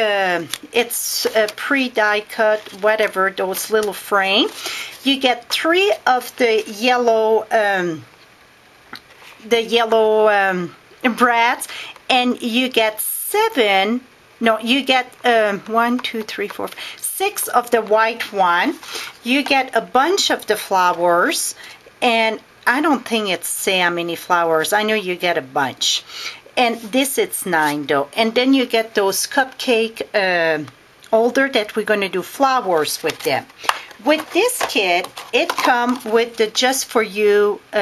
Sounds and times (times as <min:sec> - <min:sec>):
Speech: 0:00.0 - 0:08.1, 0:09.4 - 0:37.8.